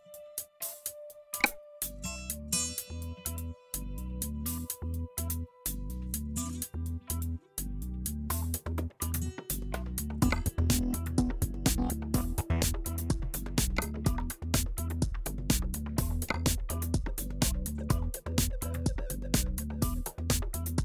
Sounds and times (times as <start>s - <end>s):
Music: 0.0s - 20.8s.